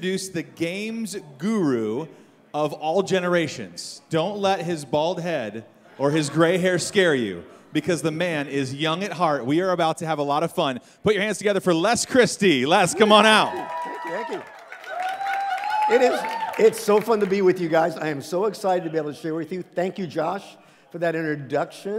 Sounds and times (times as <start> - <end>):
Speech: 0.0 - 13.5, 15.9 - 21.9.